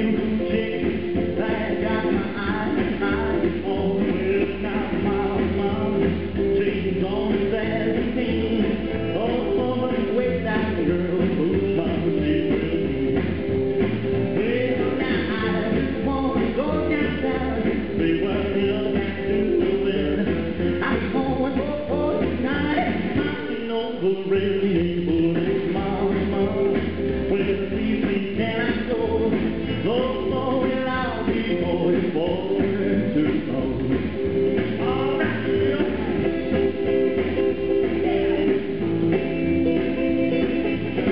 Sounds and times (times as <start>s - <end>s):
Music: 0.0s - 41.1s.